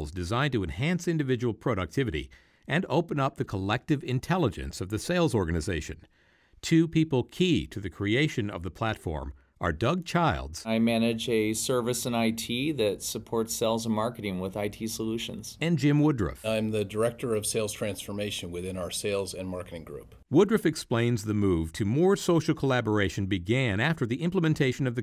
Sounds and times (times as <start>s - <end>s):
Speech: 0.0s - 25.0s.